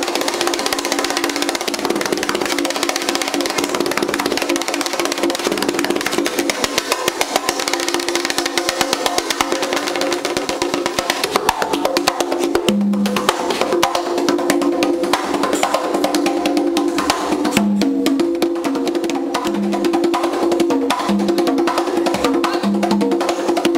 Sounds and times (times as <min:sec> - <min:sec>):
Drum: 0:00.0 - 0:23.7.